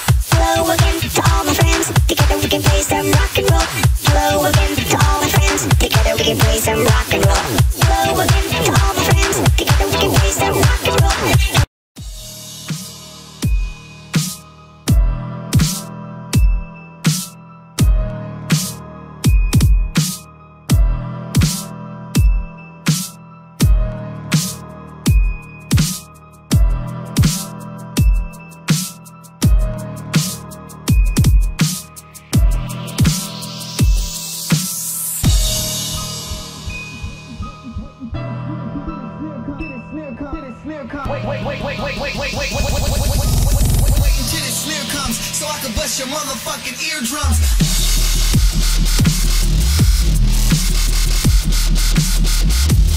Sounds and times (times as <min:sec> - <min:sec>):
Music: 0:00.0 - 0:52.9.